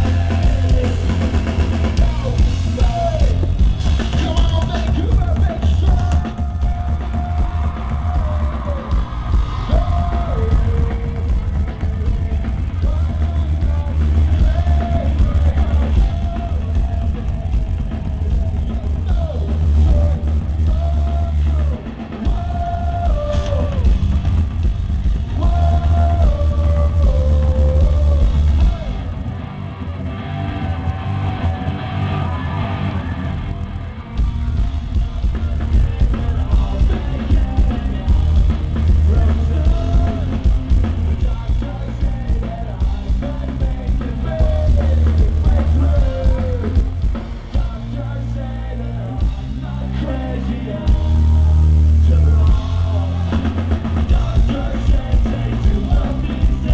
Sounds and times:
Punk rock: 0:00.0 - 0:56.7.

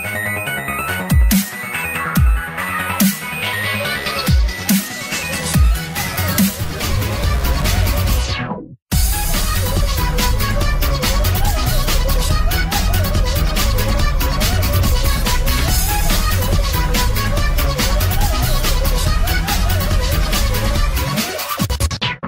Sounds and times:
Music: 0:00.0 - 0:22.2.

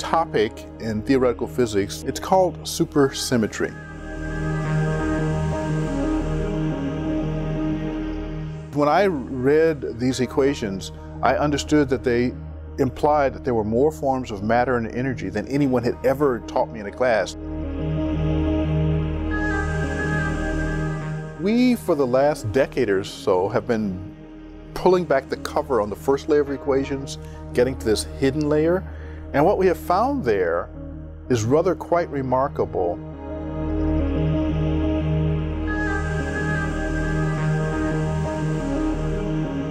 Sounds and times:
Speech: 0:00.0 - 0:03.8, 0:08.8 - 0:17.4, 0:21.4 - 0:24.1, 0:24.8 - 0:30.7, 0:31.3 - 0:33.0
Tender music: 0:00.0 - 0:39.7.

